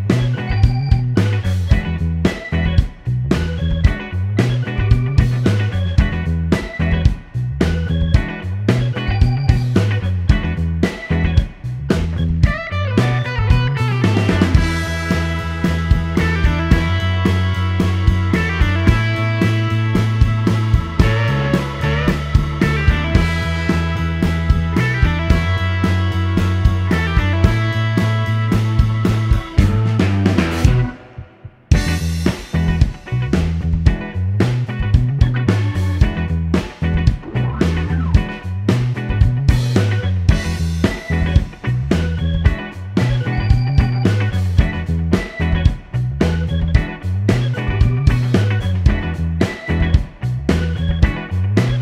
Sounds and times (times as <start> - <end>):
Music: 0.0 - 51.8.